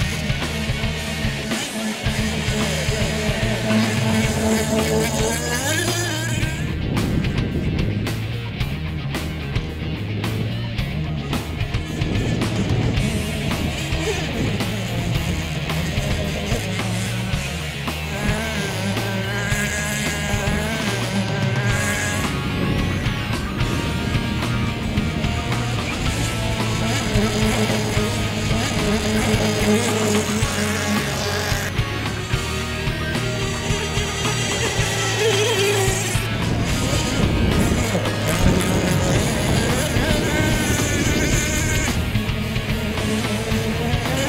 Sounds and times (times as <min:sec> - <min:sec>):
Motorboat, speedboat: 0:00.0 - 0:44.2
Music: 0:00.0 - 0:44.2.